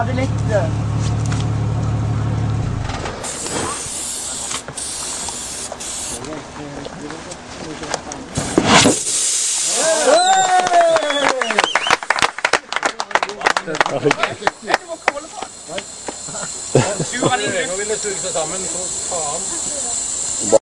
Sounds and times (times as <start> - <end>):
Speech: 6.2 - 8.4, 17.0 - 20.6.